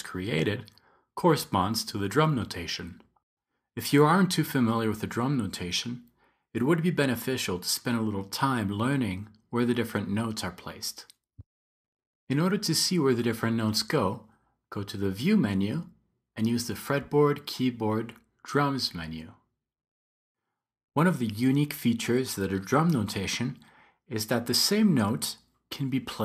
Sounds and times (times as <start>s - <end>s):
Speech: 0.0s - 3.1s, 3.8s - 11.1s, 12.3s - 19.4s, 21.0s - 26.2s.